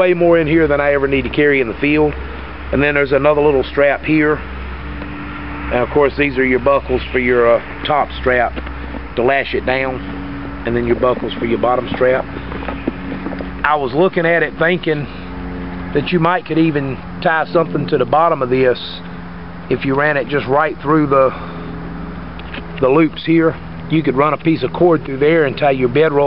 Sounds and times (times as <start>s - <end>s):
Speech: 0.0s - 4.4s, 5.7s - 8.6s, 9.2s - 10.0s, 10.6s - 12.3s, 13.6s - 15.2s, 16.0s - 19.0s, 19.7s - 21.4s, 22.8s - 26.2s
Outside, urban or manmade: 0.0s - 26.2s.